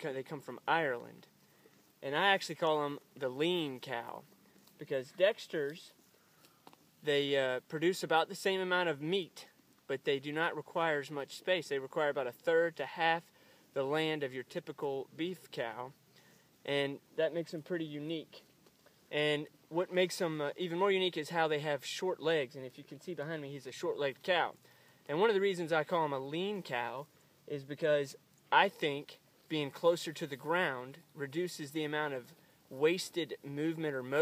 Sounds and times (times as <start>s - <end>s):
Speech: 0.0s - 1.3s, 2.0s - 6.0s, 7.0s - 16.0s, 16.6s - 18.5s, 19.1s - 34.2s.